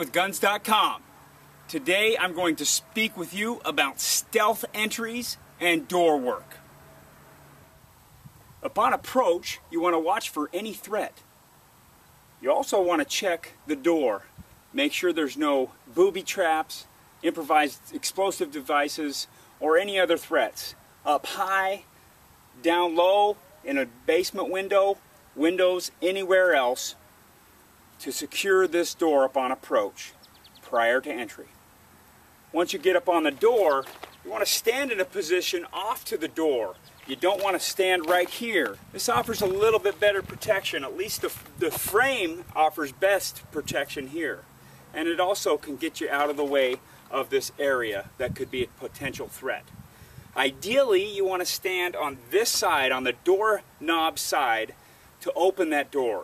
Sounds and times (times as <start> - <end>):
Speech: 0.0 - 1.0, 1.7 - 6.6, 8.6 - 11.2, 12.4 - 21.9, 22.6 - 27.0, 28.0 - 31.5, 32.5 - 49.7, 50.4 - 56.2.